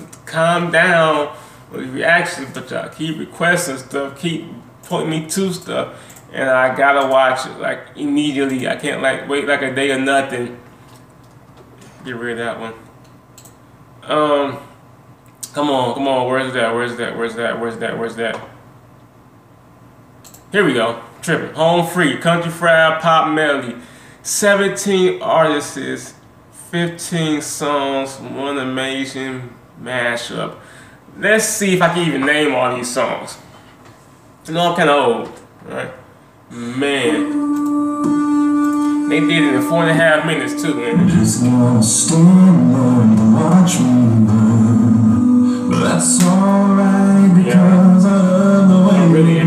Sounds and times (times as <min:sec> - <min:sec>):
Speech: 0:00.0 - 0:10.6, 0:12.0 - 0:12.9, 0:14.0 - 0:14.7, 0:15.4 - 0:18.6, 0:20.5 - 0:30.6, 0:31.2 - 0:33.5, 0:34.4 - 0:37.4, 0:39.1 - 0:41.6, 0:47.4 - 0:47.8, 0:48.8 - 0:49.4.